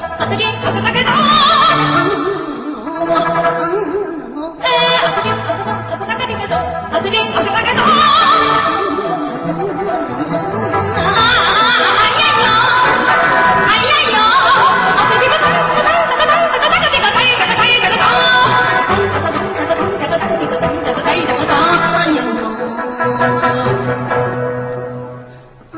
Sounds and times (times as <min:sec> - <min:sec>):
Female singing: 0:00.0 - 0:10.3, 0:10.9 - 0:24.2
Music: 0:00.0 - 0:25.7.